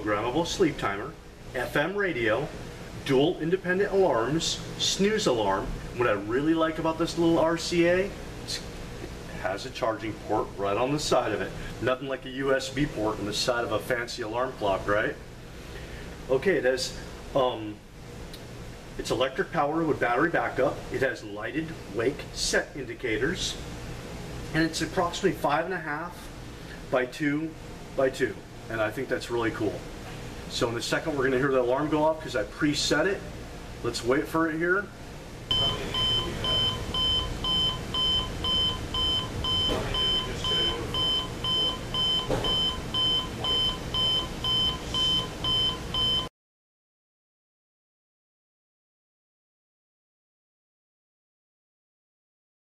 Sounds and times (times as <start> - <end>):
Speech: 0.0 - 8.7, 9.3 - 15.2, 16.3 - 17.8, 19.0 - 23.6, 24.5 - 26.3, 26.9 - 29.8, 30.5 - 36.7, 39.7 - 41.0.